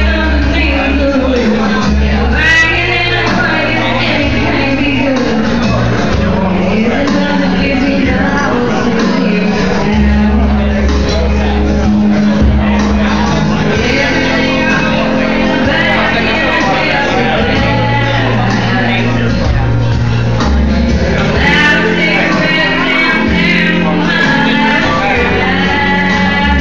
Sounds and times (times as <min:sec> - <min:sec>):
Female singing: 0:00.0 - 0:05.7, 0:06.5 - 0:10.8, 0:13.8 - 0:19.1, 0:21.4 - 0:26.6
Music: 0:00.0 - 0:26.6
Speech: 0:00.0 - 0:26.6.